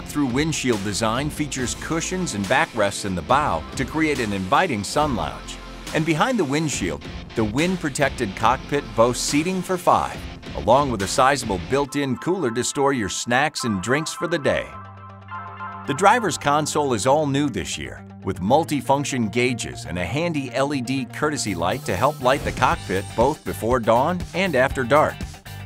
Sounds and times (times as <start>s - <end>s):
Speech: 0.0s - 14.8s, 15.9s - 25.3s
Music: 0.0s - 25.6s.